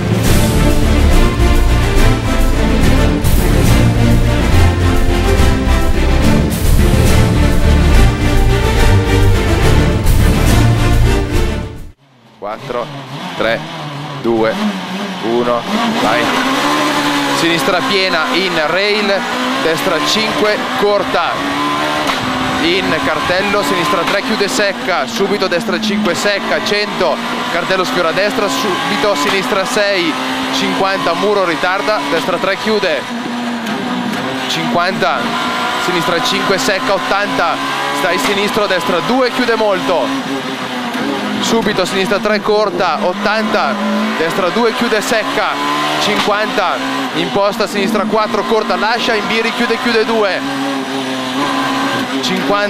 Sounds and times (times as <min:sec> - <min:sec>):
Speech: 0:12.4 - 0:13.6, 0:14.2 - 0:14.6, 0:15.2 - 0:16.4, 0:17.4 - 0:21.4, 0:22.6 - 0:33.0, 0:34.5 - 0:40.1, 0:41.4 - 0:50.4, 0:52.2 - 0:52.6.